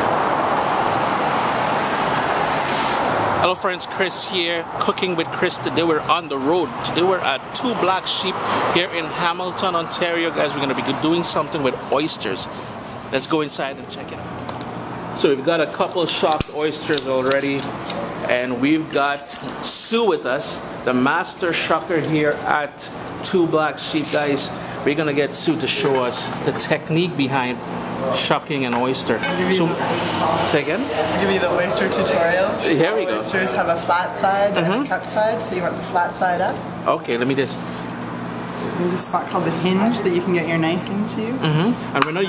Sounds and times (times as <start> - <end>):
Speech: 3.4 - 12.5, 13.1 - 14.2, 15.2 - 37.8, 38.8 - 42.2.